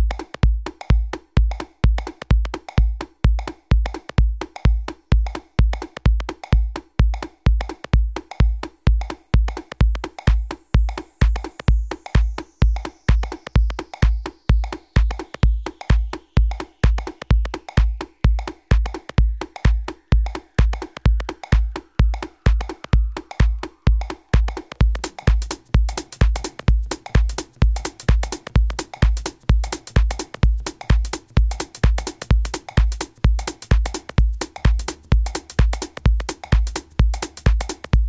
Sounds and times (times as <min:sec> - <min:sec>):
Techno: 0:00.0 - 0:38.0.